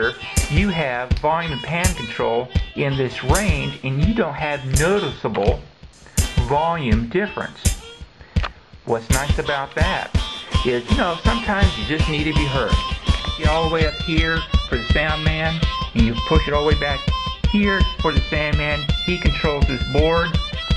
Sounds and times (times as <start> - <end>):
Speech: 0.0 - 5.7, 6.4 - 7.7, 8.9 - 12.8, 13.4 - 20.4
Inside, small room: 0.0 - 20.7
Music: 0.0 - 20.7.